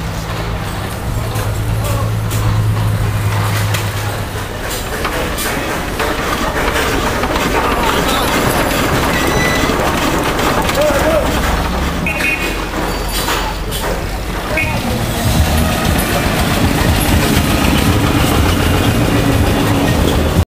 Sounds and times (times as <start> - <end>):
Truck: 0.0 - 20.4.